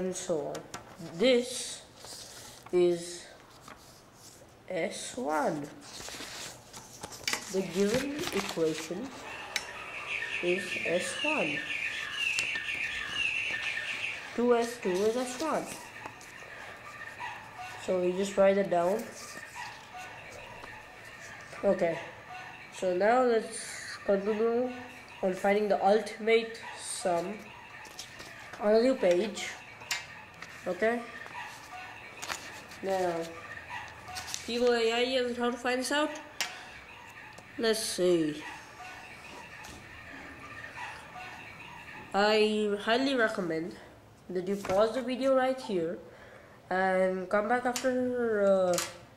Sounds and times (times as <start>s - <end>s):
Chirp, tweet: 9.2s - 18.4s.